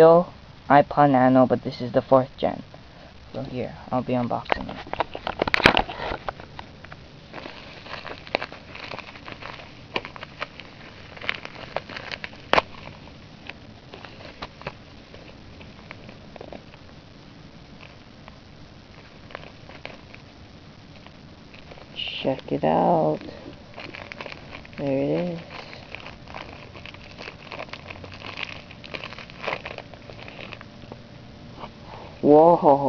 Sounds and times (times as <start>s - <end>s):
Speech: 0.0s - 2.6s, 3.4s - 4.8s, 22.0s - 23.4s, 24.8s - 25.5s, 32.2s - 32.8s.